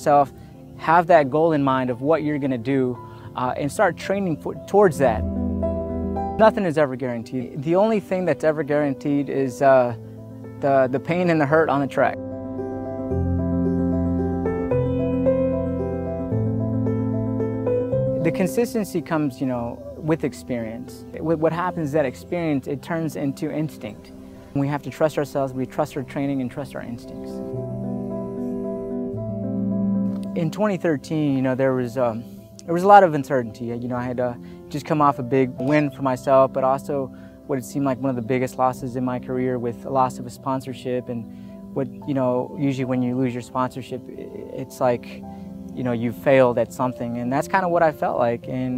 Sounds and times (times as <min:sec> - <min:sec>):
Speech: 0:00.0 - 0:05.3, 0:06.4 - 0:10.0, 0:10.6 - 0:12.2, 0:18.2 - 0:27.4, 0:30.3 - 0:41.2, 0:41.8 - 0:45.2, 0:45.8 - 0:48.7
Music: 0:00.0 - 0:48.7.